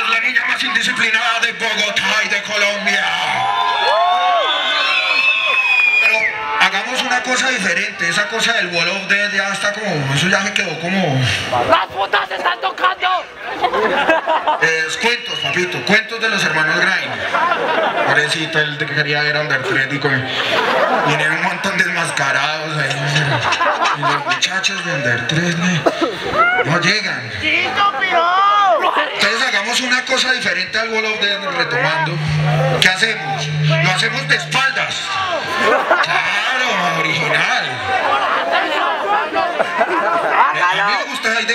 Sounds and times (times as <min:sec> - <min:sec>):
Speech: 0:00.0 - 0:03.4, 0:26.6 - 0:35.4, 0:36.0 - 0:41.5.